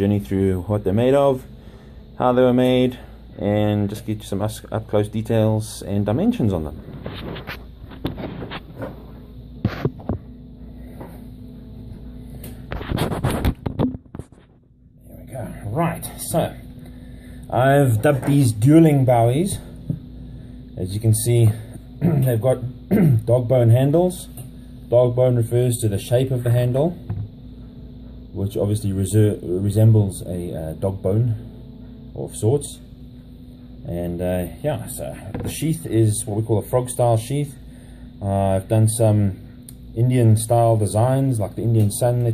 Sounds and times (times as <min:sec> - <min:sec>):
Speech: 0:00.0 - 0:01.5, 0:02.2 - 0:06.8, 0:15.1 - 0:16.7, 0:17.5 - 0:19.7, 0:20.8 - 0:27.0, 0:28.4 - 0:31.5, 0:32.2 - 0:32.9, 0:33.8 - 0:37.6, 0:38.2 - 0:42.3.